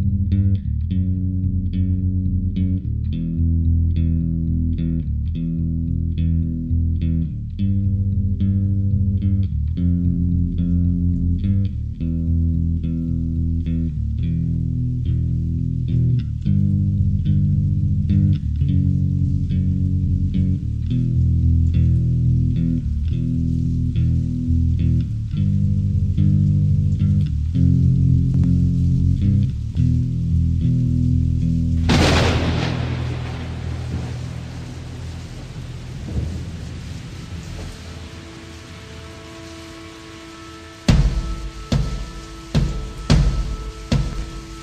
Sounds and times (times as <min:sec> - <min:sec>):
Music: 0:00.0 - 0:44.6.